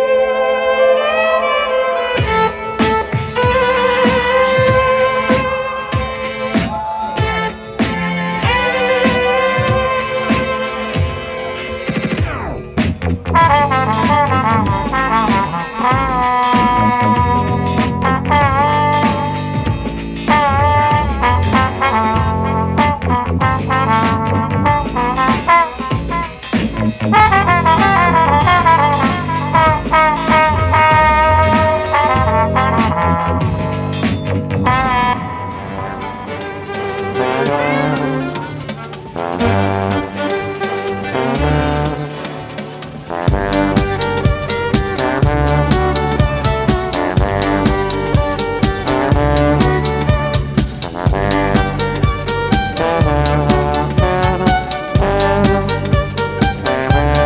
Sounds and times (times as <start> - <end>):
Musical instrument: 0.0 - 57.2.